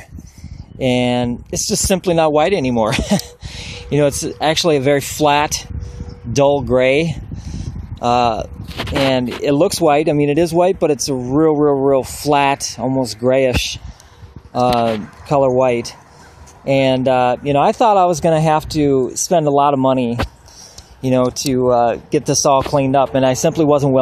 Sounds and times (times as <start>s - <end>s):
Speech: 0.8s - 3.0s, 3.9s - 5.7s, 6.3s - 7.2s, 8.0s - 13.8s, 14.6s - 16.0s, 16.7s - 20.3s, 21.0s - 24.0s.